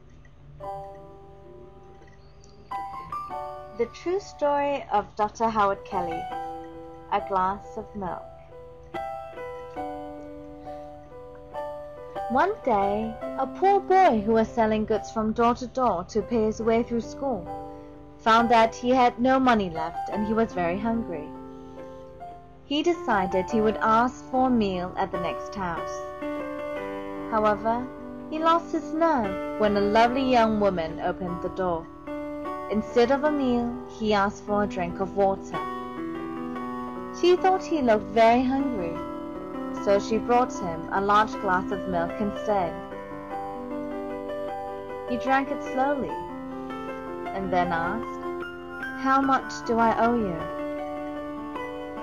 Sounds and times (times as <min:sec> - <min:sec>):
Music: 0:00.0 - 0:52.0
Speech: 0:03.8 - 0:06.2, 0:07.1 - 0:08.2, 0:12.3 - 0:17.4, 0:18.3 - 0:21.3, 0:22.7 - 0:26.0, 0:27.3 - 0:31.8, 0:32.7 - 0:35.6, 0:37.2 - 0:39.0, 0:39.8 - 0:42.8, 0:45.1 - 0:46.2, 0:47.4 - 0:48.0, 0:49.0 - 0:50.5.